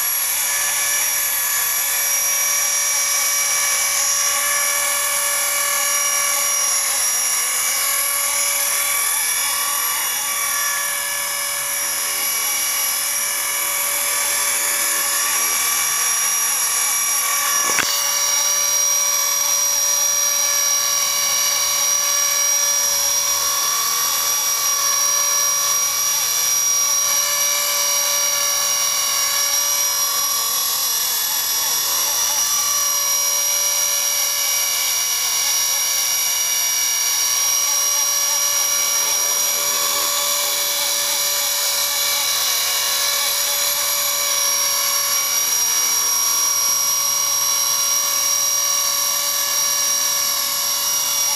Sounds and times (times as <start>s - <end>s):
Dental drill, dentist's drill: 0.0s - 51.3s
Helicopter: 0.0s - 51.3s.